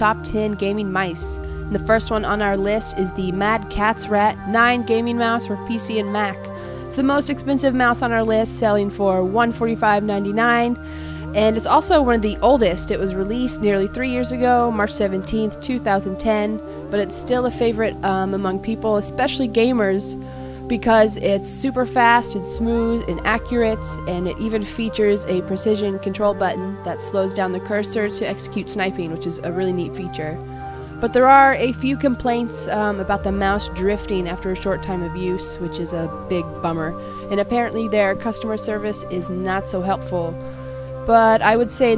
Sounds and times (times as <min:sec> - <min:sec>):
Speech: 0:00.0 - 0:10.8, 0:11.4 - 0:30.4, 0:31.0 - 0:40.4, 0:41.1 - 0:41.9
Music: 0:00.0 - 0:41.9.